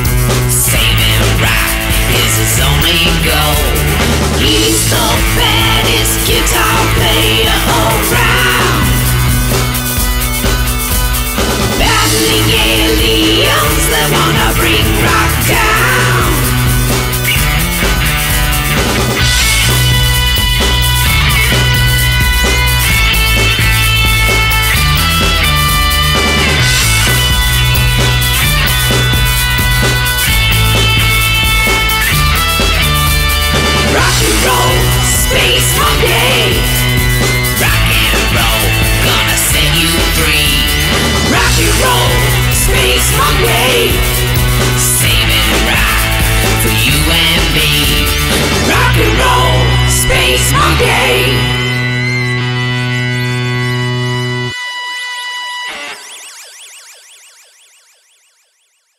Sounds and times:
Rock and roll: 0:00.0 - 0:56.6.

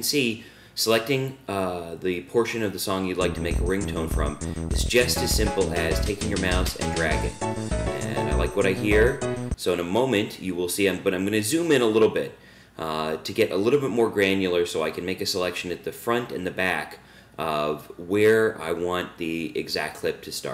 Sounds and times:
Speech: 0:00.0 - 0:07.3, 0:08.0 - 0:20.5
Music: 0:03.2 - 0:09.6.

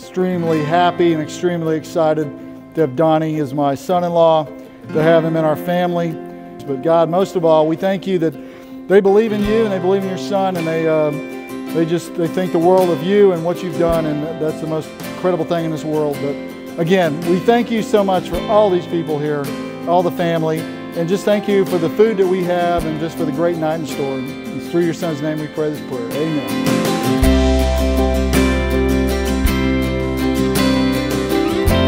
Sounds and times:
Speech: 0:00.0 - 0:11.2, 0:11.8 - 0:26.6
Music: 0:00.0 - 0:31.8.

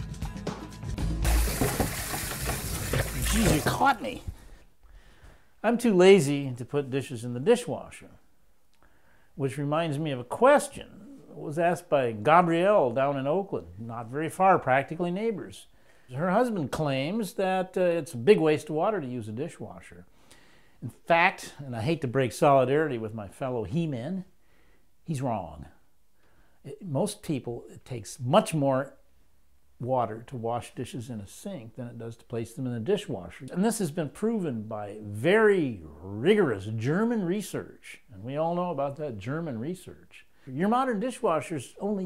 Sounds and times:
Speech: 0:03.2 - 0:04.4, 0:05.6 - 0:08.2, 0:09.4 - 0:20.1, 0:20.8 - 0:24.3, 0:25.0 - 0:25.8, 0:26.6 - 0:29.0, 0:29.8 - 0:42.0.

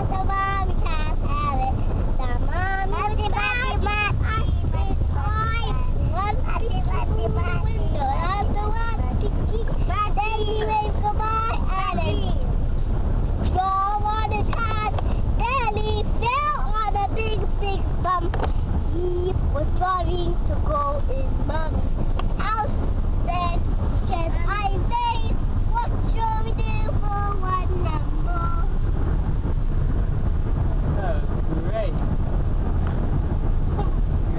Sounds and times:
Child singing: 0:00.0 - 0:12.4, 0:13.5 - 0:21.8, 0:22.4 - 0:28.7
Car: 0:00.0 - 0:34.3.

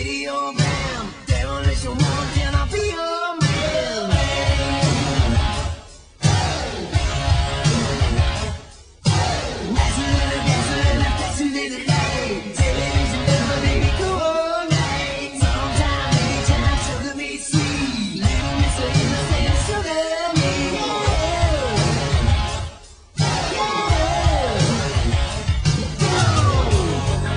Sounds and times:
Singing: 0:00.0 - 0:06.9, 0:09.1 - 0:22.6, 0:23.2 - 0:27.3
Vocal music: 0:00.0 - 0:27.3.

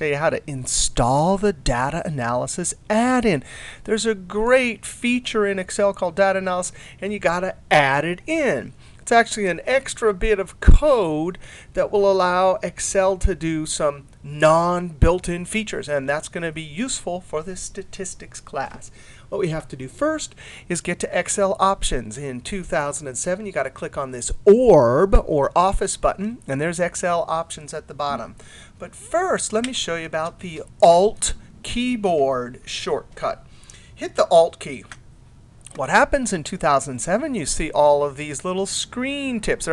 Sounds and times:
Speech: 0:00.0 - 0:35.0, 0:35.7 - 0:39.7.

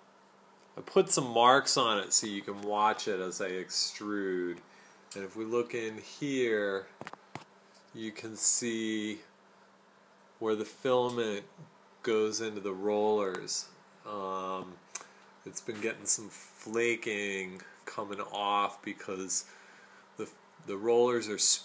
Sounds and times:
Speech: 0:00.8 - 0:04.6, 0:05.2 - 0:07.0, 0:07.9 - 0:09.3, 0:10.4 - 0:14.8, 0:15.4 - 0:19.5, 0:20.2 - 0:21.6.

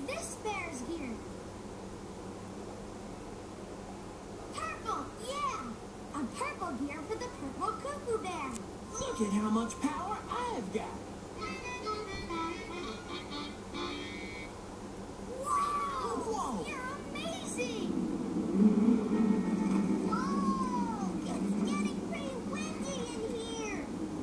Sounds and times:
Speech: 0:00.0 - 0:01.2, 0:04.6 - 0:11.0, 0:20.1 - 0:23.9
Music: 0:11.4 - 0:14.5.

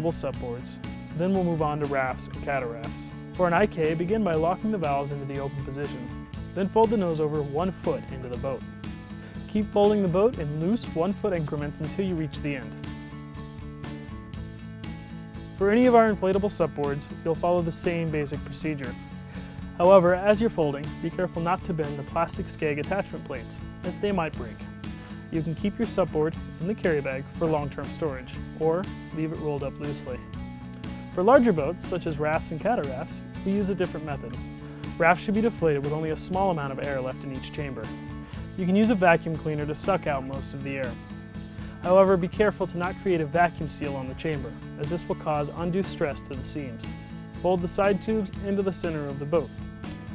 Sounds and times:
Speech: 0:00.0 - 0:08.6, 0:09.5 - 0:12.8, 0:15.6 - 0:19.0, 0:19.8 - 0:24.6, 0:25.3 - 0:30.2, 0:31.2 - 0:34.4, 0:35.0 - 0:37.9, 0:38.6 - 0:41.0, 0:41.9 - 0:49.5
Music: 0:00.0 - 0:50.1.

